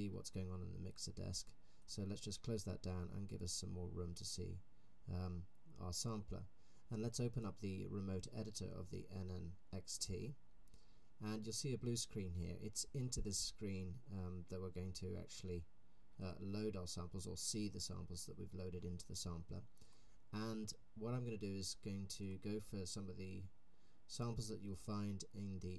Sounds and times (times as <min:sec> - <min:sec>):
Speech: 0:00.0 - 0:10.4, 0:11.2 - 0:19.7, 0:20.3 - 0:23.5, 0:24.1 - 0:25.7.